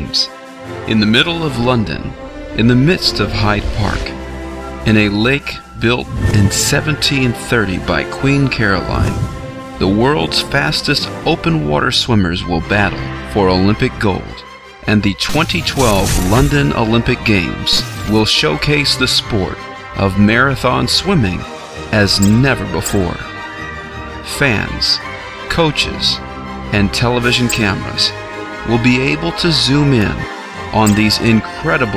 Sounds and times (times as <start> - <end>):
Speech: 0.0 - 0.3, 0.9 - 4.2, 4.8 - 23.3, 24.2 - 31.9
Music: 0.0 - 31.9.